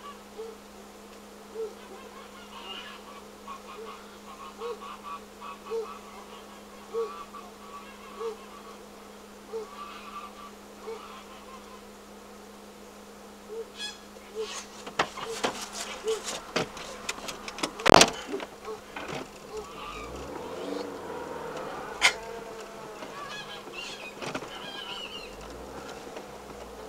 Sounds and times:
Honk: 1.5 - 8.9, 9.5 - 11.9, 13.5 - 25.9.

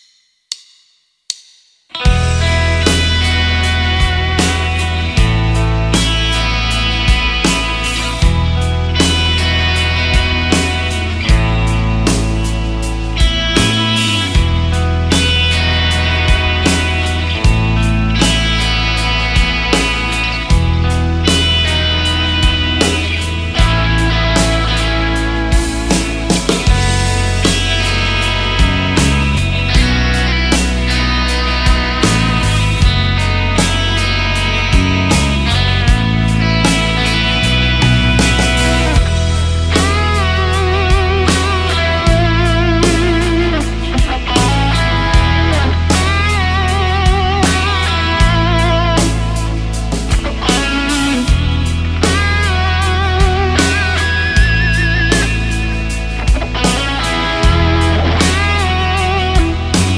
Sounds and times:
Electric guitar: 1.9 - 59.9
Strum: 2.0 - 59.9.

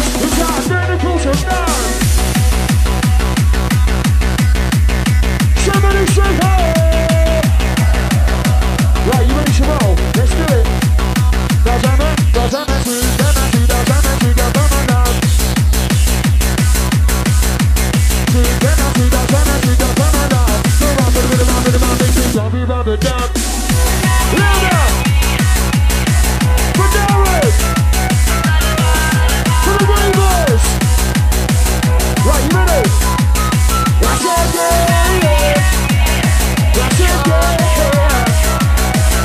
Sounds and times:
Music: 0.0 - 39.2.

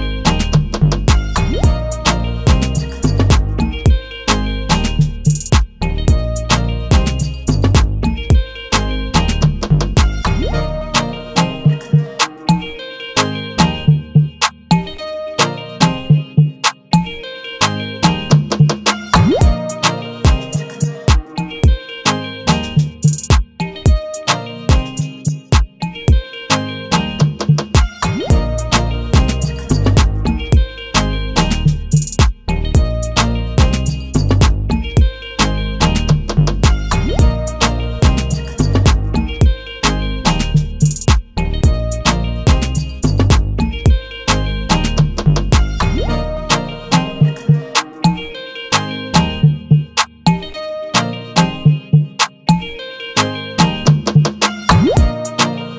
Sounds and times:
Music: 0.0 - 55.7.

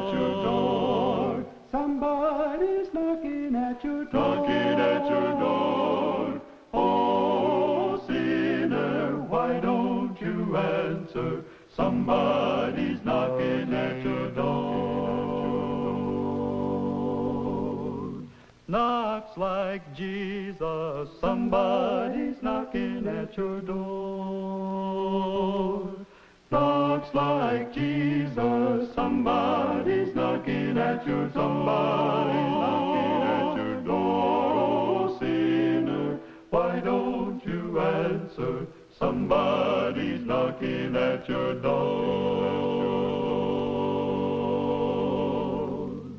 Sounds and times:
Music: 0.0 - 18.4, 19.0 - 46.1.

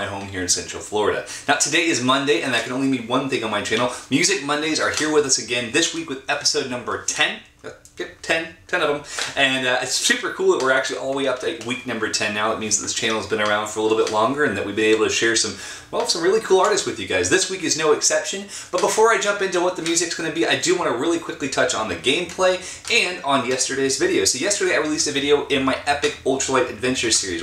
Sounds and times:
Speech: 0.0 - 27.4.

